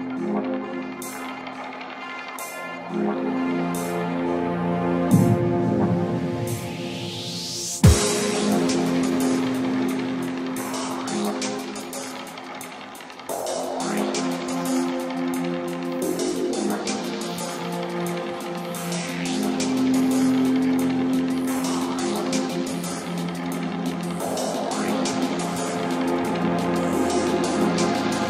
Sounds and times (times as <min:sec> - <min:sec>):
Music: 0:00.0 - 0:28.2.